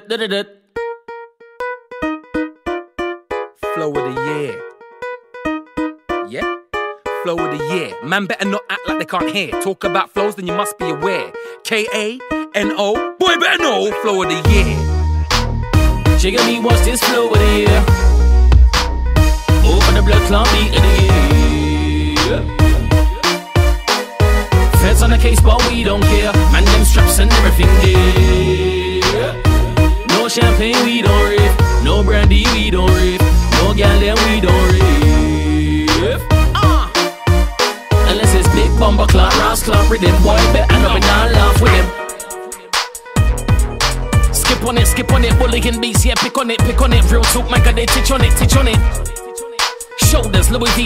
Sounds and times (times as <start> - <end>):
Music: 0.1 - 50.8.